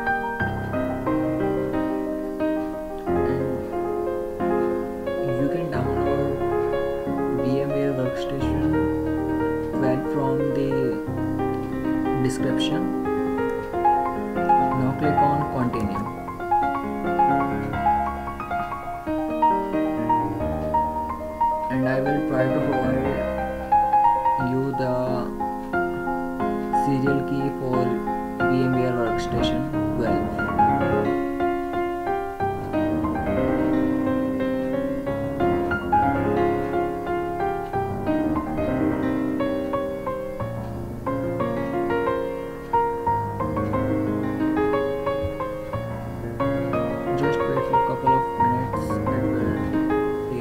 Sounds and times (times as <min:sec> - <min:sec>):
Piano: 0:00.0 - 0:50.4
Speech: 0:03.1 - 0:03.6, 0:05.2 - 0:06.4, 0:07.3 - 0:08.9, 0:09.8 - 0:11.1, 0:12.2 - 0:13.0, 0:14.6 - 0:16.1, 0:21.7 - 0:23.4, 0:24.4 - 0:25.4, 0:26.8 - 0:30.4, 0:47.2 - 0:50.4.